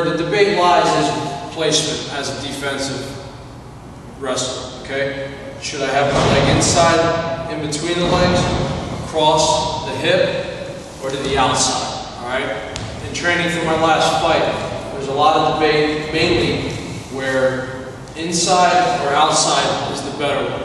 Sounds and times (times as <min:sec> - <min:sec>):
Speech: 0:00.0 - 0:03.2, 0:04.2 - 0:20.6.